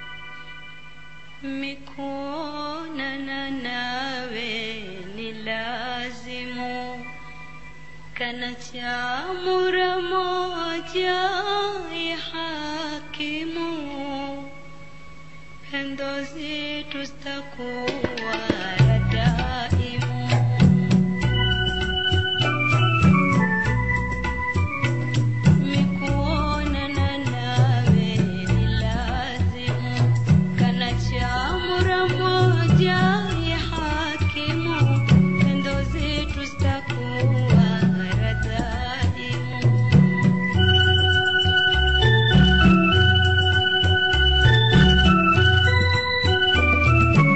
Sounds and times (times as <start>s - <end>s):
Music: 0.0s - 47.3s
Female singing: 1.4s - 7.1s, 8.2s - 14.6s, 15.7s - 21.0s, 25.6s - 39.9s.